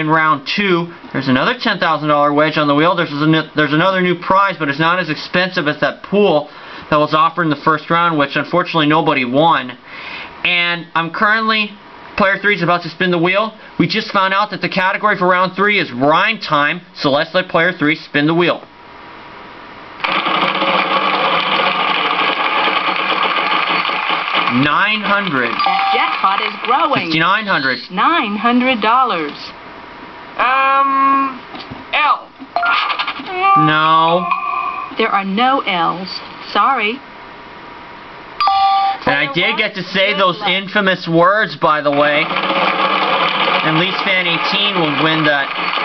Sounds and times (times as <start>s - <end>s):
Speech: 0.0s - 9.8s, 10.5s - 18.7s, 24.5s - 29.6s, 33.3s - 34.3s, 35.0s - 37.0s, 39.0s - 42.3s, 43.7s - 45.5s.